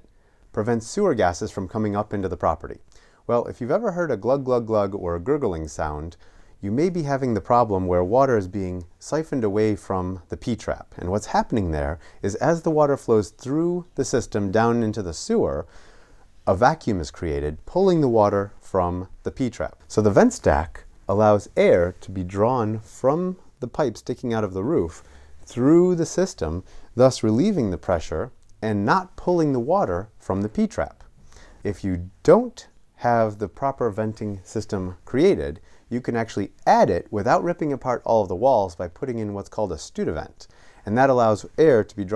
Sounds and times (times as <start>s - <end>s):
Speech: 0.0s - 15.7s, 16.4s - 42.1s.